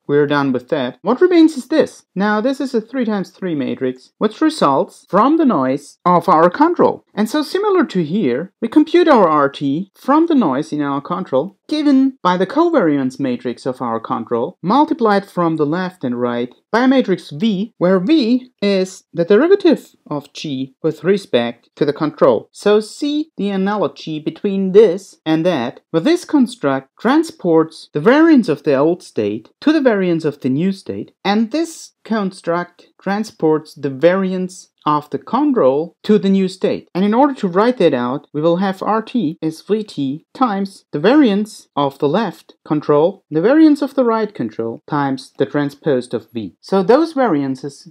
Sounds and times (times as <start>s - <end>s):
Speech: 0.0s - 47.9s.